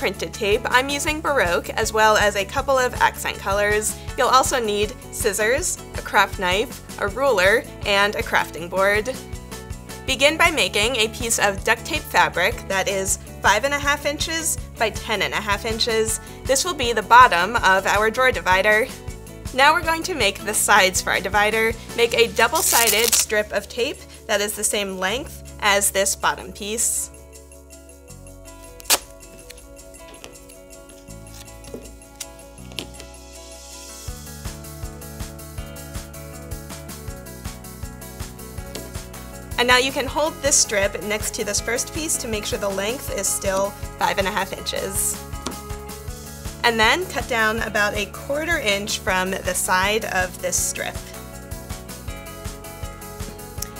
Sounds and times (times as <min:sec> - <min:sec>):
Speech: 0:00.0 - 0:09.2, 0:10.1 - 0:18.9, 0:19.6 - 0:27.1, 0:39.6 - 0:45.2, 0:46.6 - 0:51.0
Music: 0:00.0 - 0:53.7.